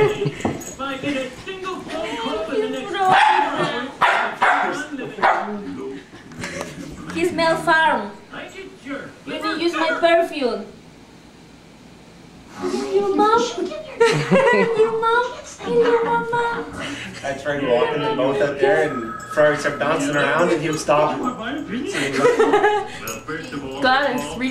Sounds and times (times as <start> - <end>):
Bow-wow: 3.1 - 5.5.